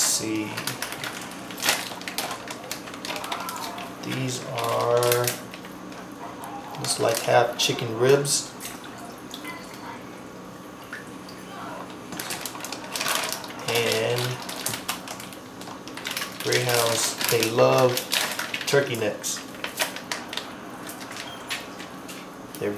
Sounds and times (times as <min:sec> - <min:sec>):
Speech: 0:00.0 - 0:00.8, 0:02.3 - 0:05.4, 0:06.2 - 0:10.2, 0:13.6 - 0:14.4, 0:16.4 - 0:18.0, 0:18.7 - 0:19.4, 0:22.6 - 0:22.7.